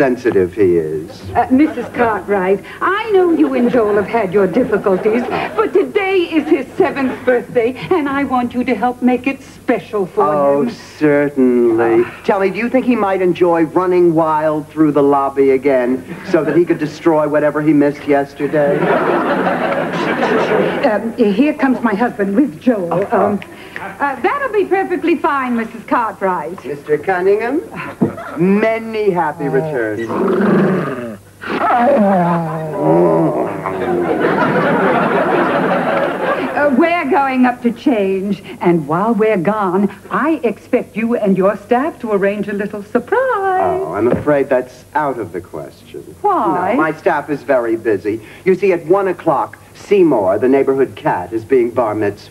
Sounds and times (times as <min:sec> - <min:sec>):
Inside, large room or hall: 0:29.9 - 0:36.6.